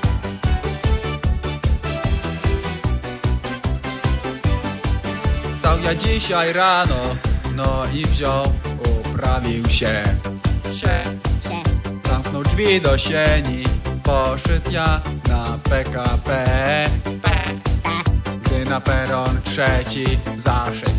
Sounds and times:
Music: 0.0s - 20.9s.

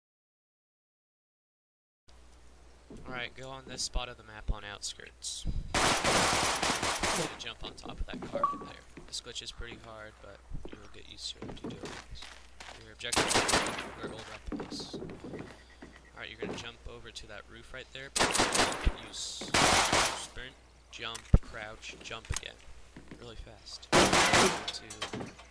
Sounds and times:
Speech: 3.0s - 5.5s, 7.2s - 15.0s, 16.2s - 18.2s, 18.8s - 22.6s, 23.2s - 25.2s.

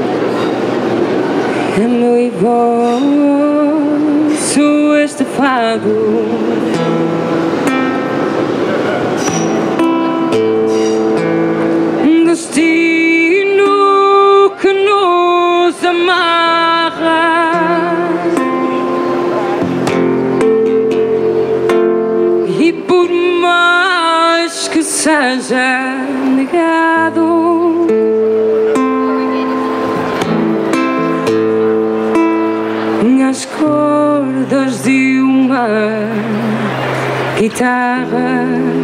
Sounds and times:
Plucked string instrument: 0.0s - 38.8s.

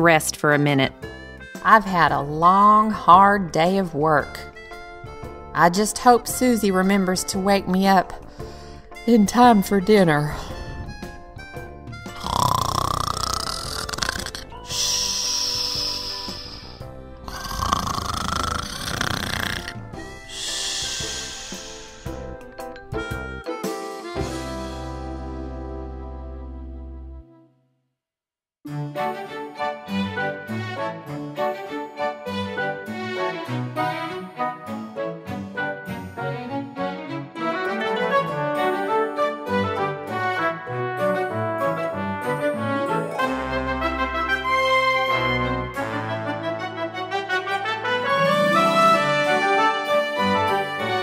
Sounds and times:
Music: 0.0s - 28.0s, 28.7s - 51.0s.

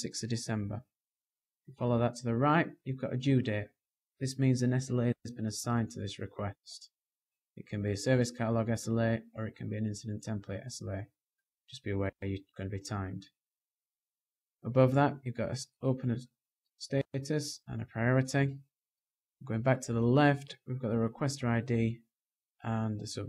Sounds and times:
Speech: 0.0s - 0.9s, 1.7s - 7.0s, 7.6s - 13.4s, 14.6s - 18.7s, 19.4s - 23.2s.

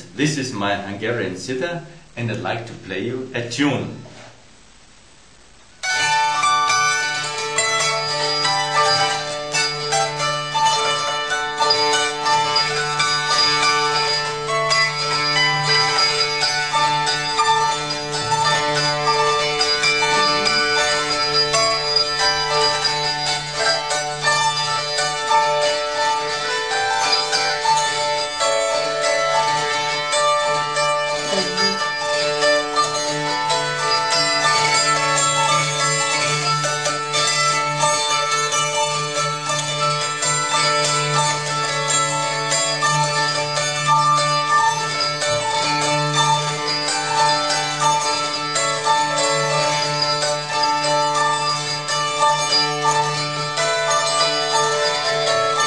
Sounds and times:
Pizzicato: 16.0s - 23.9s, 31.0s - 34.8s.

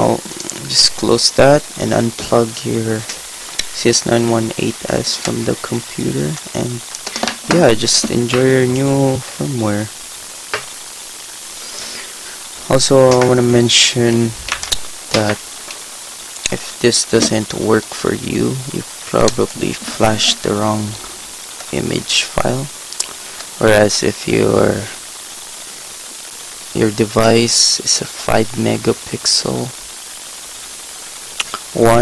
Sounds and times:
Speech: 0.0s - 10.0s, 12.6s - 14.4s, 15.1s - 15.4s, 16.5s - 21.1s, 21.7s - 22.8s, 23.6s - 25.0s, 26.7s - 29.8s, 31.4s - 32.0s.

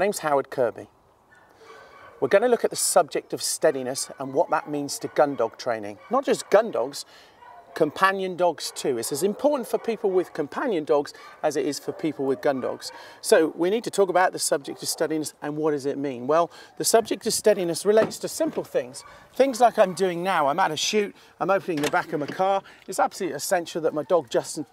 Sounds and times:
Speech: 0.0s - 0.9s, 2.2s - 7.1s, 7.8s - 24.7s.

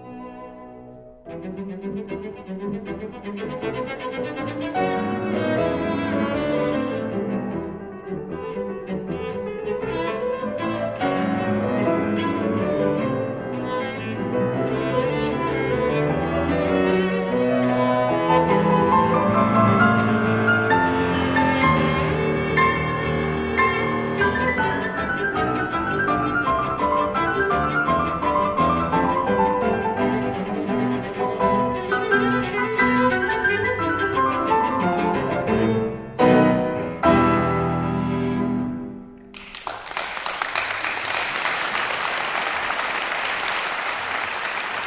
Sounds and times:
Cello: 0.0s - 39.4s
Classical music: 0.0s - 44.8s.

